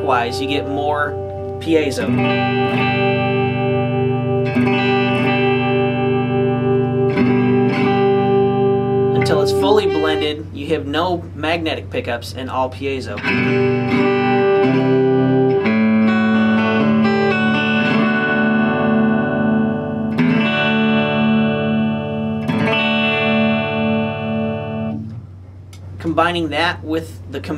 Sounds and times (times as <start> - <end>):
Speech: 0.0 - 2.2, 9.2 - 13.2, 26.0 - 27.5
Electric guitar: 0.0 - 10.5, 13.2 - 25.3
Strum: 0.0 - 26.3.